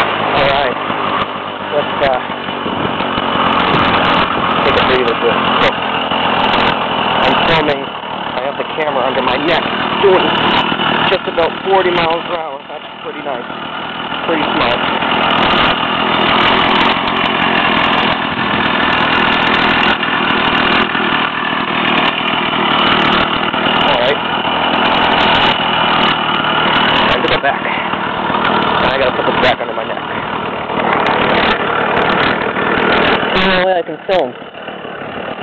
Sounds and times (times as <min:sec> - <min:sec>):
Engine: 0:00.0 - 0:35.4
Motorcycle: 0:00.0 - 0:35.4
Speech: 0:00.3 - 0:00.8, 0:01.7 - 0:02.3, 0:04.6 - 0:05.8, 0:07.2 - 0:10.3, 0:11.1 - 0:13.5, 0:14.2 - 0:14.8, 0:23.8 - 0:24.2, 0:27.1 - 0:27.8, 0:28.8 - 0:30.0, 0:33.3 - 0:34.4.